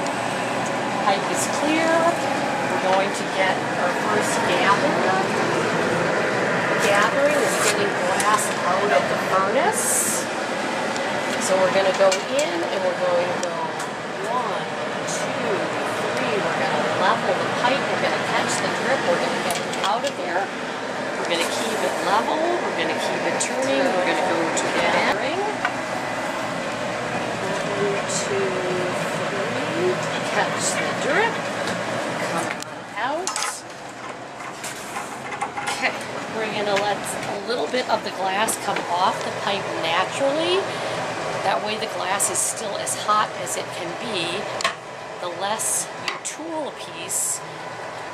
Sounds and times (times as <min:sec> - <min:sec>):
Inside, public space: 0:00.0 - 0:47.4
Speech: 0:01.0 - 0:02.2, 0:02.8 - 0:05.4, 0:06.8 - 0:10.3, 0:11.4 - 0:20.5, 0:21.2 - 0:25.6, 0:27.4 - 0:31.4, 0:32.3 - 0:33.6, 0:35.7 - 0:40.8, 0:41.5 - 0:44.6, 0:45.2 - 0:47.4.